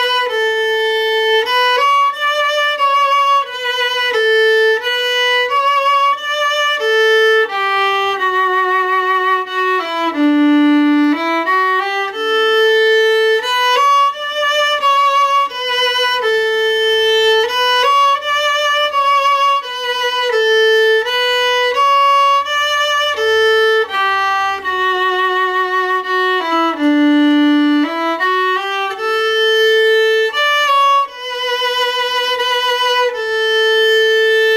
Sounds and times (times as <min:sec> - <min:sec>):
Violin, fiddle: 0:00.0 - 0:34.5.